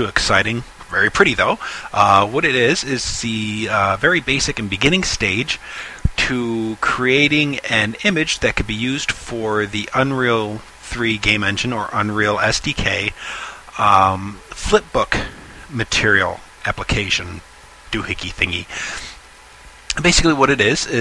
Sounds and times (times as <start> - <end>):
Speech: 0.0 - 19.1, 19.9 - 21.0.